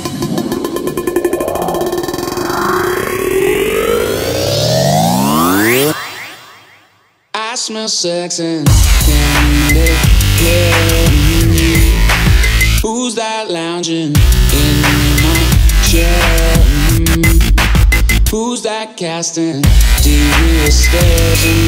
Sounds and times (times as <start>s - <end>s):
Dubstep: 0.0s - 6.4s, 8.7s - 12.9s, 14.2s - 18.4s, 19.7s - 21.6s.